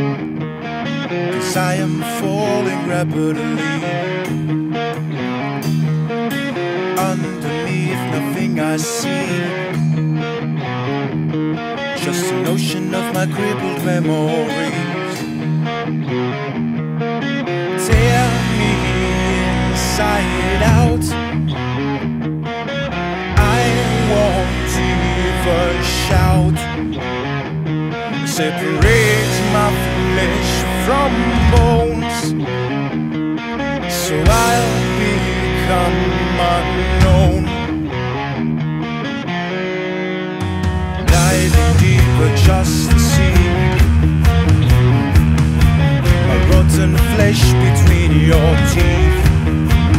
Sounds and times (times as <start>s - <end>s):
Independent music: 0.0s - 49.9s
Rhythm and blues: 14.6s - 49.9s.